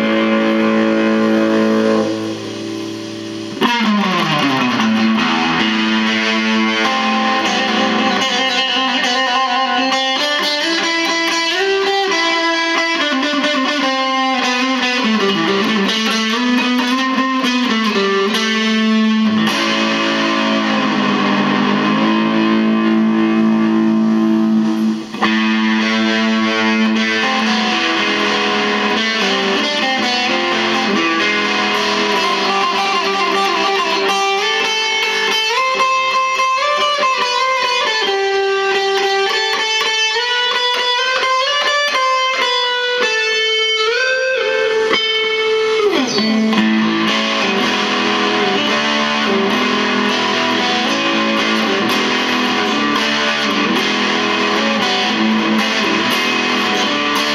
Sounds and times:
Electric guitar: 0.0s - 57.3s
Strum: 0.0s - 57.3s.

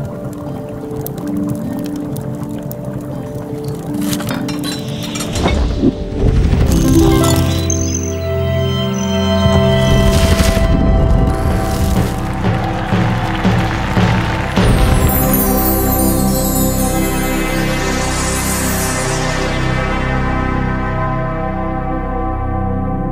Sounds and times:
Music: 0.0s - 23.1s
Sound effect: 4.3s - 12.2s.

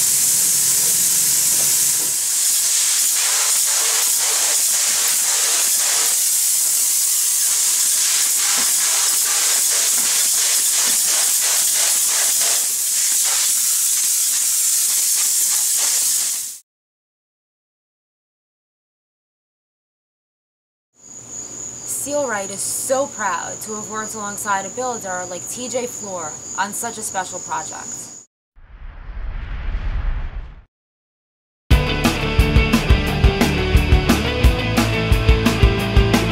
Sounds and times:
Spray: 0.0s - 16.6s.

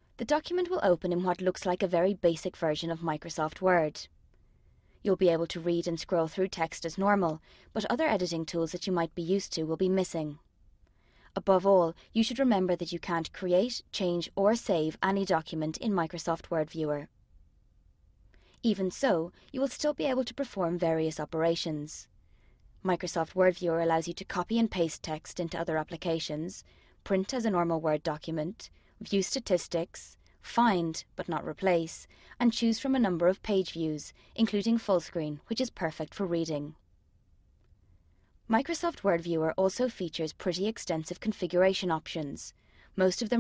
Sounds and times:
Speech synthesizer: 0.2s - 4.1s, 5.1s - 10.4s, 11.4s - 17.1s, 18.7s - 22.0s, 22.9s - 36.8s, 38.5s - 43.4s.

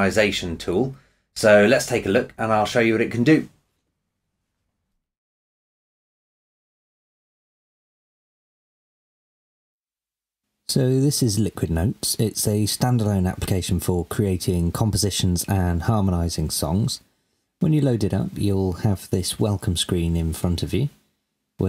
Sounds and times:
Speech: 0.0s - 3.6s, 10.7s - 21.0s.

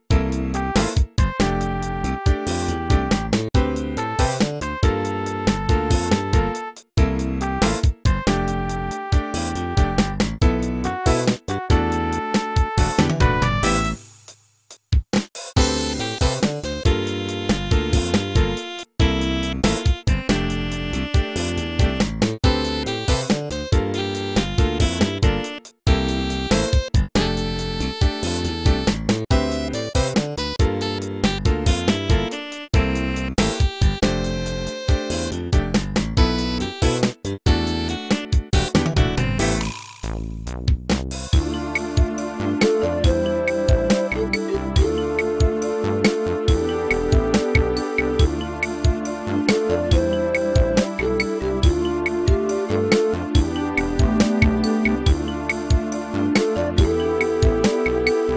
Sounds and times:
Background music: 0.0s - 14.3s, 15.6s - 40.2s, 41.4s - 58.3s.

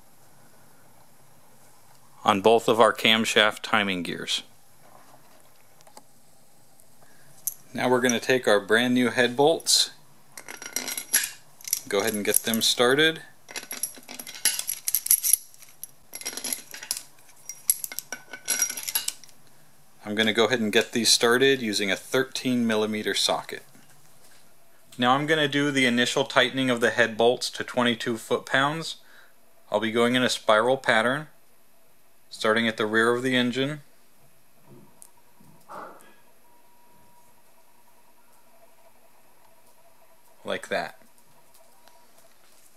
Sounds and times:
Speech: 2.2s - 4.5s, 7.7s - 10.0s, 11.9s - 13.3s, 20.0s - 23.7s, 25.0s - 29.0s, 29.7s - 31.4s, 32.3s - 33.8s, 40.4s - 41.0s.

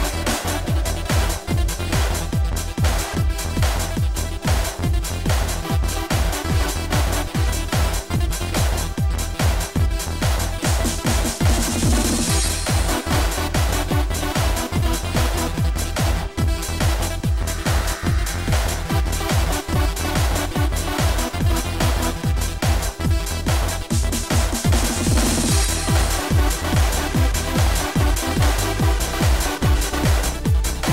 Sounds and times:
Music: 0.0s - 30.9s.

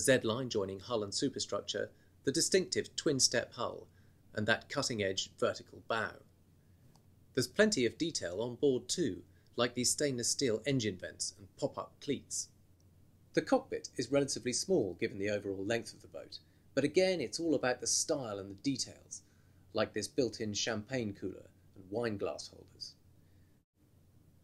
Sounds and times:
Speech: 0.0s - 6.3s, 7.4s - 12.6s, 13.4s - 23.0s.

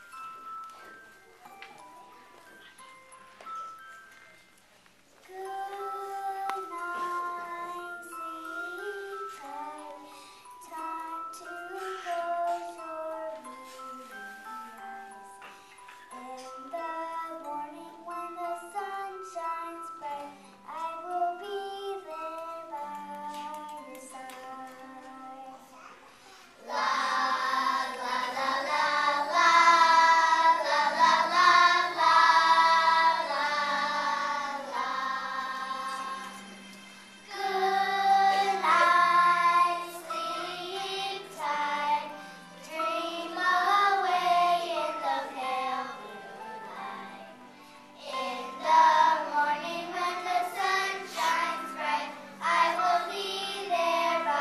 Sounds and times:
Music: 0.0s - 54.4s.

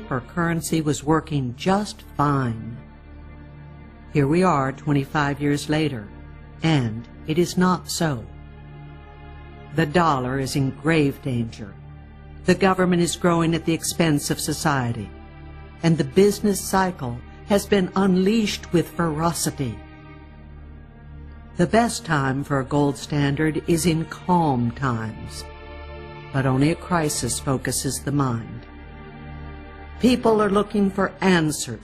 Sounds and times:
Speech: 0.0s - 2.8s, 4.2s - 8.3s, 9.7s - 11.8s, 12.5s - 15.1s, 15.8s - 19.8s, 21.6s - 25.5s, 26.3s - 28.6s, 30.0s - 31.8s
Music: 0.0s - 31.8s.

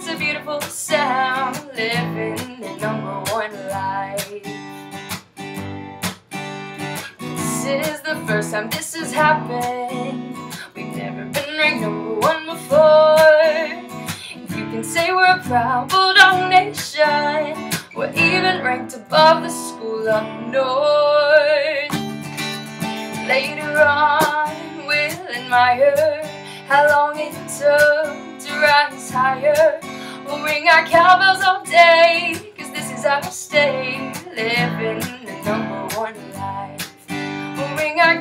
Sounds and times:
Music: 0.0s - 38.2s.

